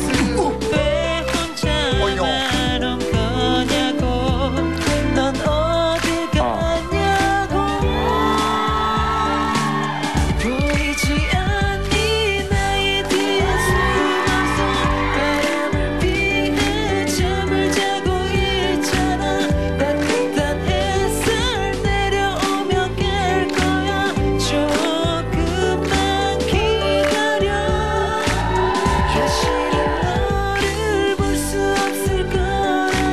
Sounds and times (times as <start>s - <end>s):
Music: 0.0s - 33.1s.